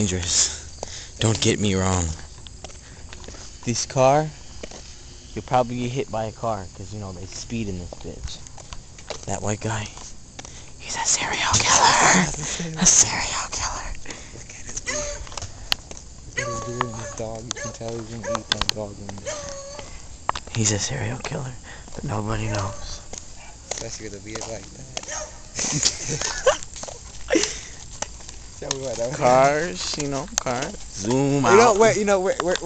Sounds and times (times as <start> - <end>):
Walk, footsteps: 0.8 - 4.0, 4.6 - 5.0, 7.2 - 10.7, 14.0 - 20.6, 21.2 - 32.6
Speech: 16.4 - 19.2, 28.6 - 32.6.